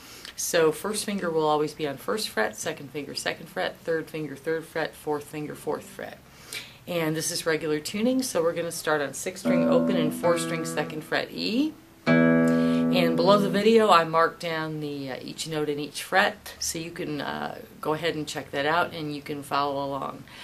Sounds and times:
Speech: 0:00.3 - 0:06.2, 0:06.9 - 0:11.8, 0:12.9 - 0:20.3
Strum: 0:09.4 - 0:13.8.

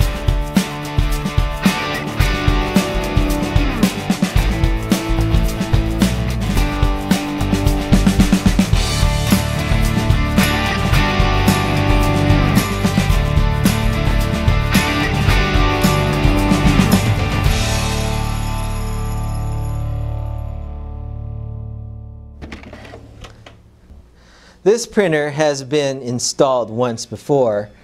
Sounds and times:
Music: 0:00.0 - 0:22.4.

